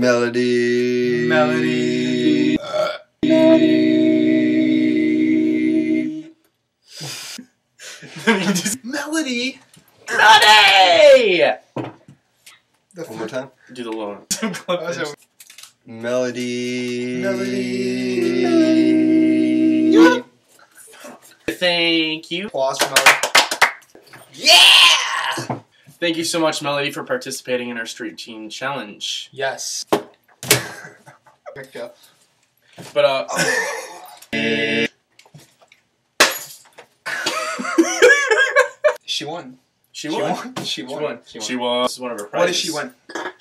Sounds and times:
Yell: 10.1s - 11.6s, 17.3s - 20.3s, 24.3s - 25.6s.

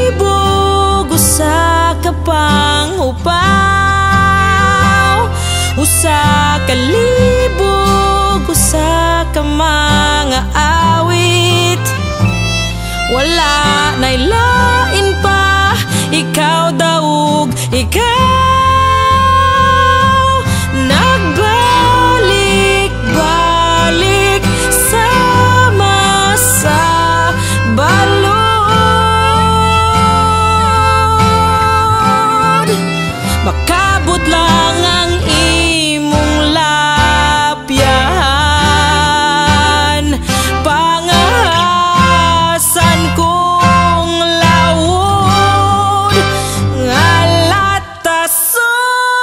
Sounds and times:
Harmonica: 0.0s - 47.9s.

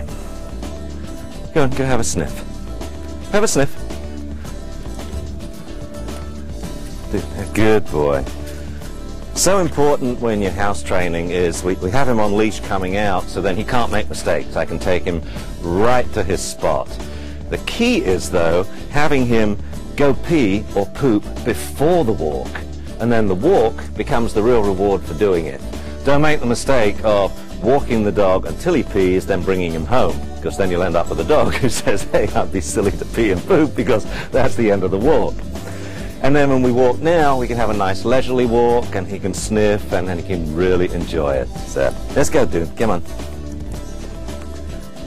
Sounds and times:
Music: 0.0s - 45.0s
Speech: 1.5s - 2.4s, 3.3s - 3.8s, 7.1s - 8.3s, 9.4s - 35.4s, 36.2s - 43.1s.

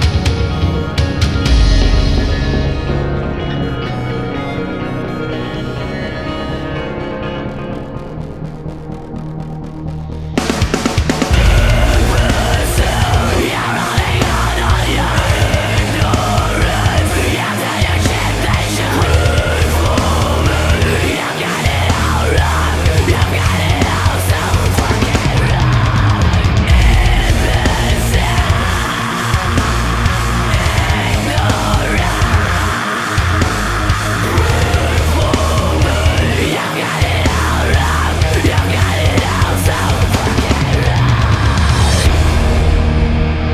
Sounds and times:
Music: 0.0s - 43.5s.

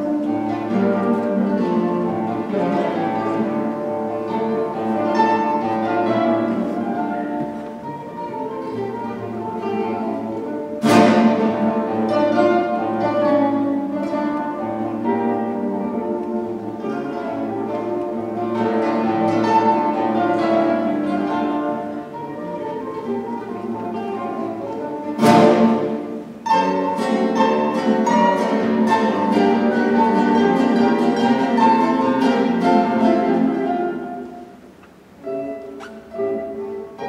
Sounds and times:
Acoustic guitar: 0.0s - 37.0s.

